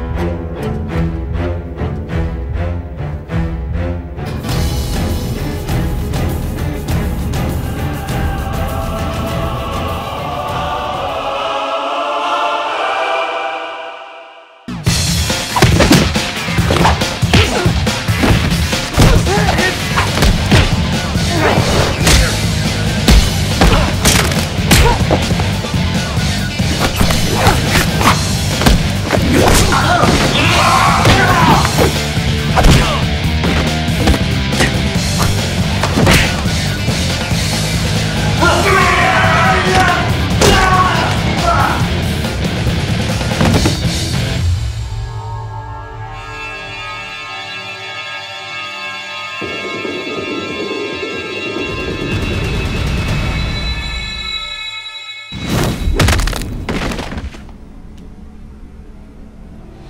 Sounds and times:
Music: 0.0 - 59.9.

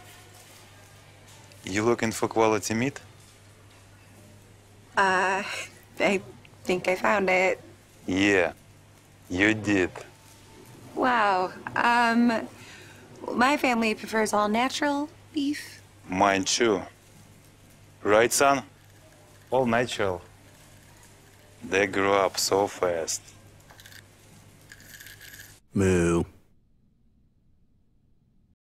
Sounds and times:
Speech: 25.8 - 26.3.

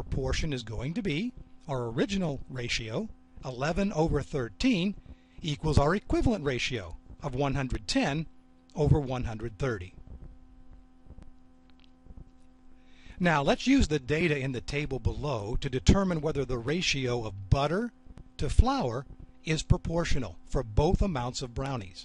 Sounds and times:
Speech: 0.0 - 10.0, 13.2 - 22.0.

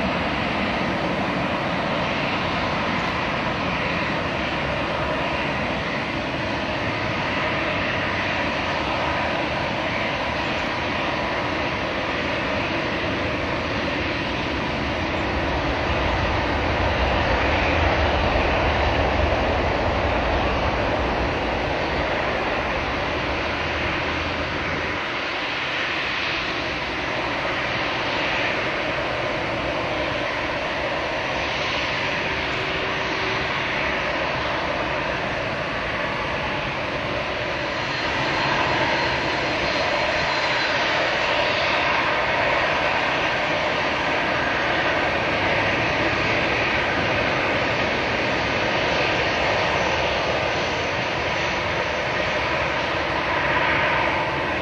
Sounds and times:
Wind noise (microphone): 0.0 - 54.6.

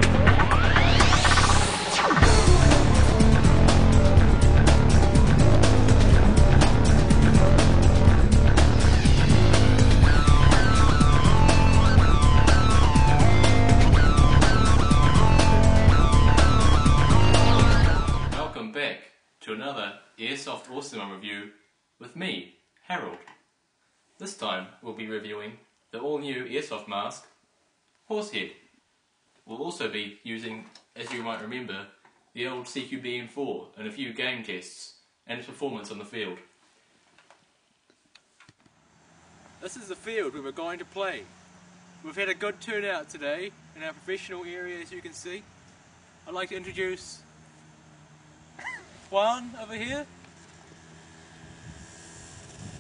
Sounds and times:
Music: 0.0 - 18.6
Speech: 18.5 - 23.3, 24.2 - 27.4, 28.1 - 28.6, 29.5 - 36.5, 39.6 - 41.3, 42.0 - 45.5, 46.3 - 47.3, 49.1 - 50.1.

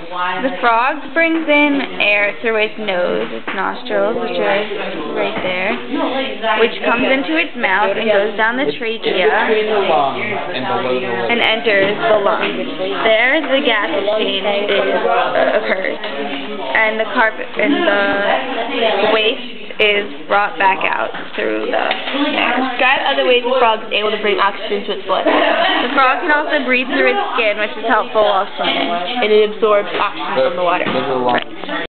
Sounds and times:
Speech: 0.0 - 31.8.

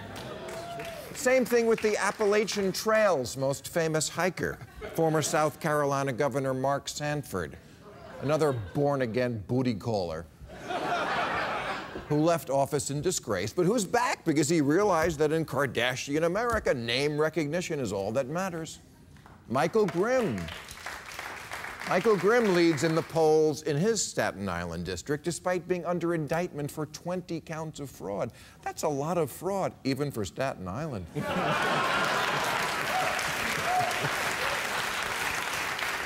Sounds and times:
Speech: 1.2 - 7.6, 8.2 - 10.3, 12.1 - 18.8, 19.5 - 20.5, 21.9 - 31.1.

